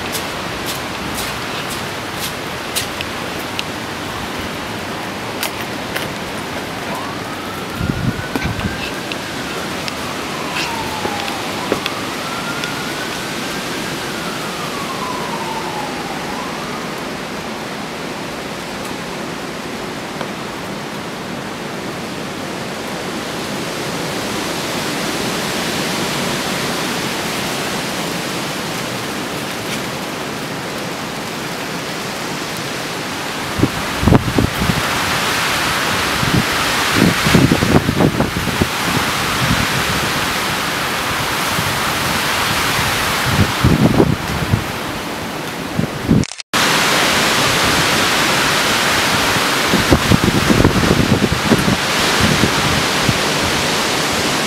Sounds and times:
Wind noise (microphone): 7.6s - 9.1s, 33.5s - 40.4s, 41.1s - 44.9s, 45.7s - 46.3s, 49.0s - 54.2s.

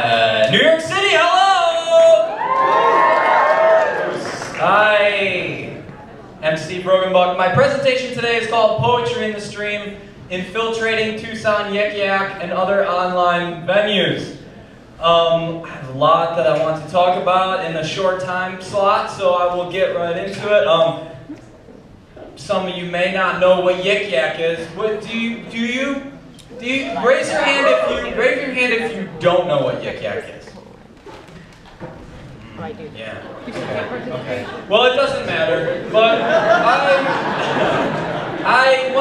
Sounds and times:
Speech: 0.0s - 2.3s, 4.2s - 14.4s, 15.0s - 21.1s, 22.4s - 30.7s, 38.4s - 39.0s.

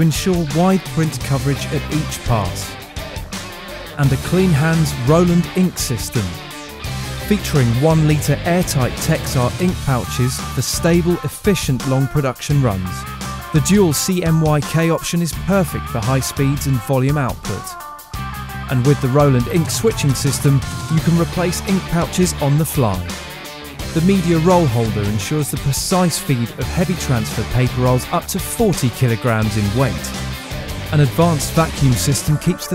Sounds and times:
Speech: 0.0s - 2.8s, 4.0s - 6.4s, 7.2s - 13.0s, 13.6s - 17.8s, 18.7s - 23.1s, 24.0s - 30.2s, 30.9s - 32.7s
Music: 0.0s - 32.7s.

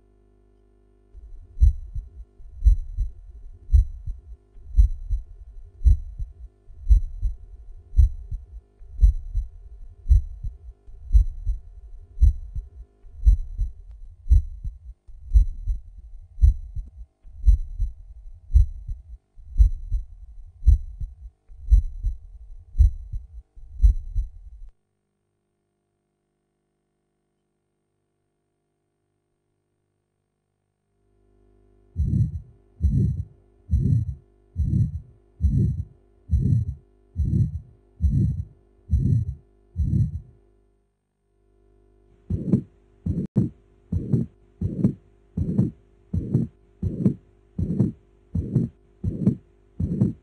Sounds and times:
Heart sounds, heartbeat: 1.2s - 24.7s, 32.0s - 40.3s, 42.2s - 50.2s.

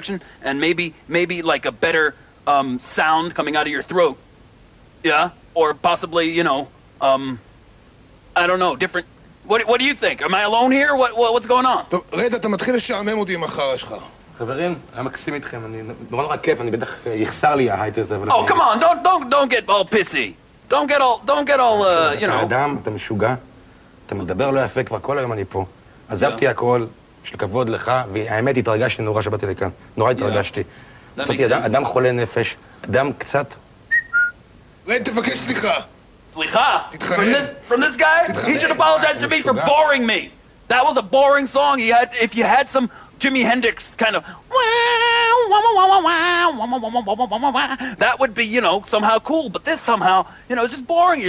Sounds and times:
Whistling: 33.9s - 34.4s.

